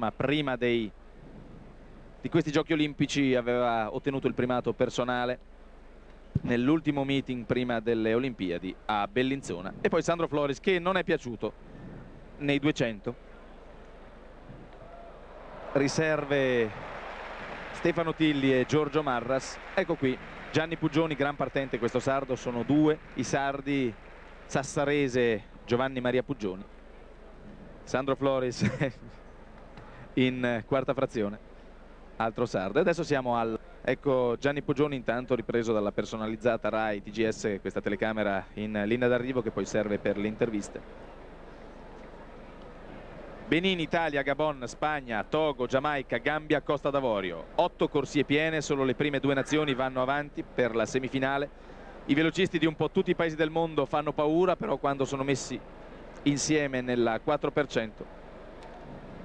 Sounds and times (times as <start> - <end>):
Speech: 0.0 - 0.9, 2.3 - 5.4, 6.4 - 11.6, 12.4 - 13.2, 15.8 - 16.8, 17.8 - 26.7, 27.9 - 29.0, 30.2 - 31.4, 32.2 - 40.8, 43.5 - 51.5, 52.1 - 55.6, 56.3 - 58.0
Outside, urban or manmade: 0.0 - 59.2.